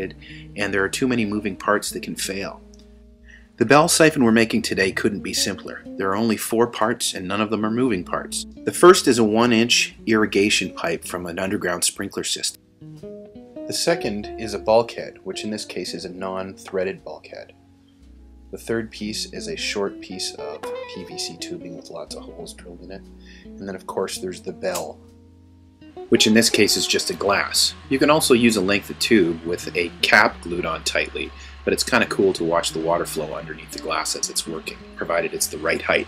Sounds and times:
Speech: 0.0s - 2.6s, 3.6s - 12.6s, 13.7s - 17.5s, 18.6s - 25.0s, 26.1s - 36.0s
Music: 0.0s - 36.0s.

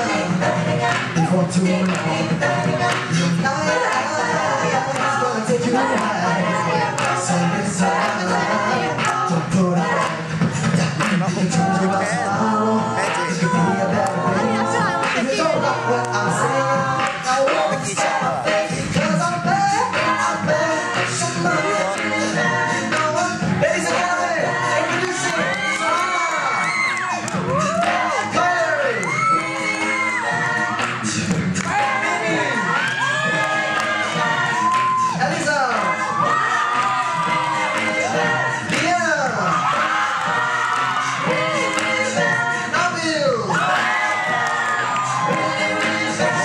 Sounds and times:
Music: 0.0s - 46.4s.

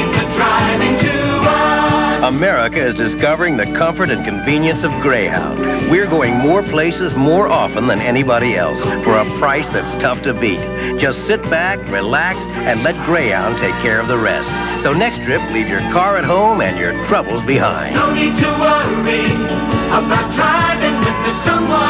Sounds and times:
Music: 0.0s - 21.8s
Speech: 2.2s - 18.0s.

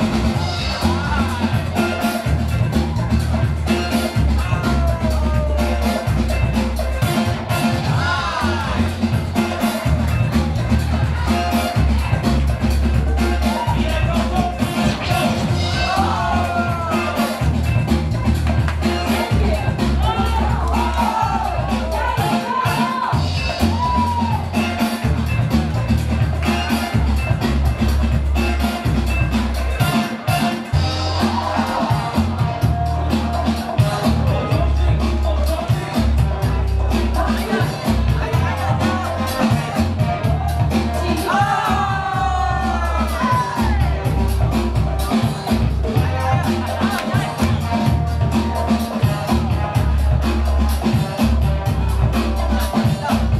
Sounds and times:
Music: 0.0s - 53.3s
Speech: 13.0s - 17.4s, 18.9s - 23.3s, 29.7s - 53.3s.

